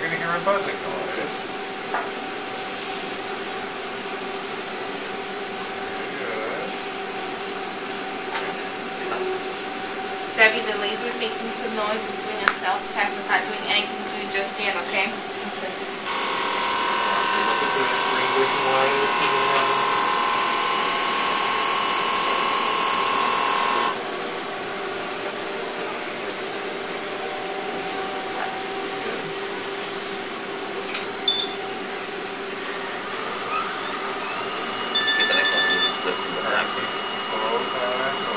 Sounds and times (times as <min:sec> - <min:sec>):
Power tool: 0:02.6 - 0:05.2, 0:16.0 - 0:24.3.